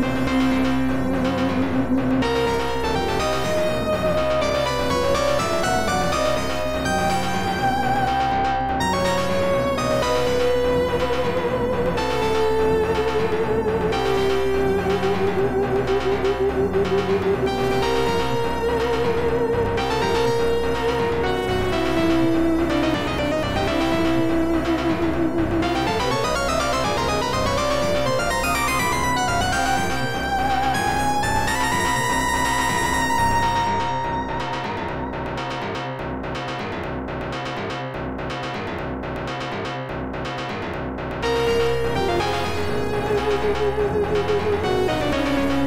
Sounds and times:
Music: 0.0 - 45.6.

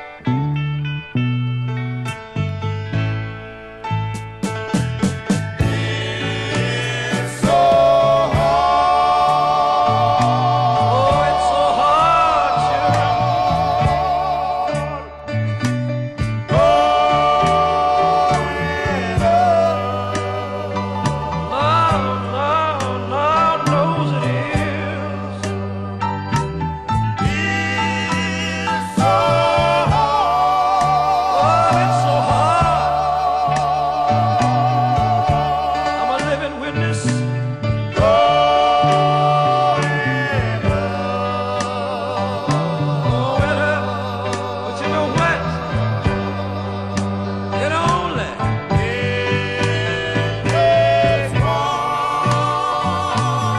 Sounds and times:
Music: 0.0 - 53.5
Male singing: 5.7 - 15.0, 16.5 - 25.5, 27.3 - 37.2, 38.0 - 46.9, 47.5 - 53.5.

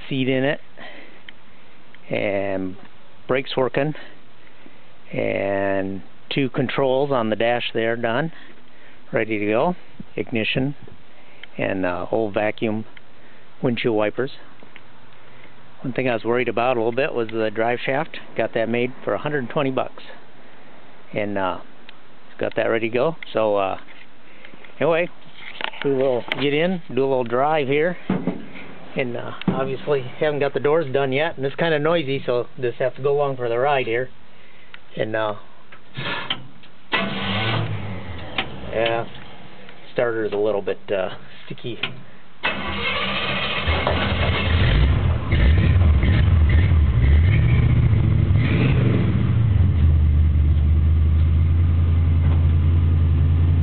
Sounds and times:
Car: 36.9 - 38.6, 42.4 - 53.6
Accelerating, revving, vroom: 43.8 - 49.6.

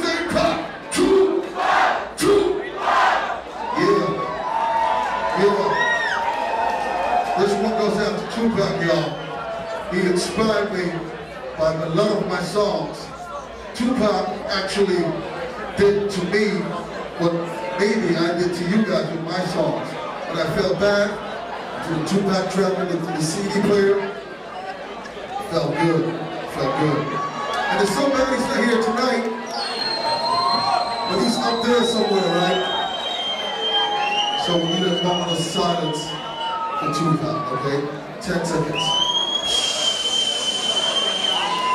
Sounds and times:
Speech: 0.0 - 1.5, 2.2 - 2.7, 3.7 - 4.3, 5.3 - 6.0, 7.3 - 24.2, 25.3 - 29.4, 31.0 - 32.9, 34.4 - 36.2, 36.8 - 39.1.

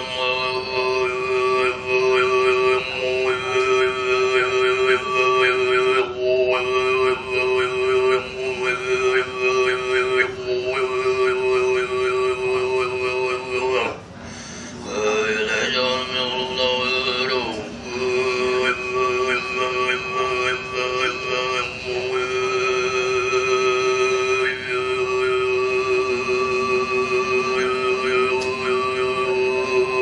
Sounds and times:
Male singing: 0.0 - 14.0, 14.8 - 30.0.

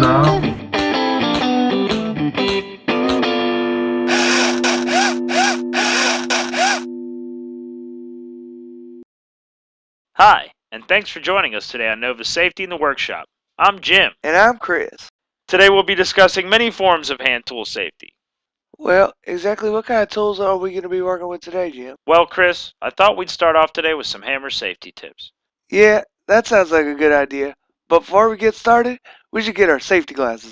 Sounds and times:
Speech: 10.2 - 18.1, 18.8 - 30.5.

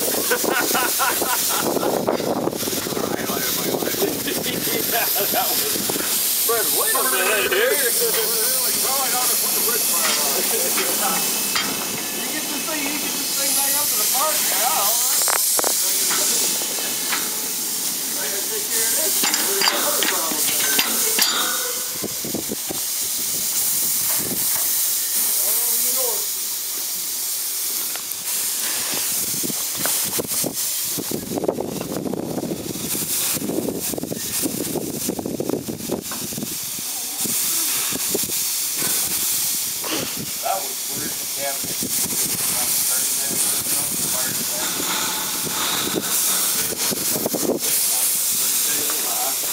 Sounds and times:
Hiss: 0.0 - 49.5
Speech: 3.0 - 11.4, 12.2 - 16.8, 18.1 - 21.9, 25.3 - 26.3, 40.4 - 44.9, 46.4 - 49.5.

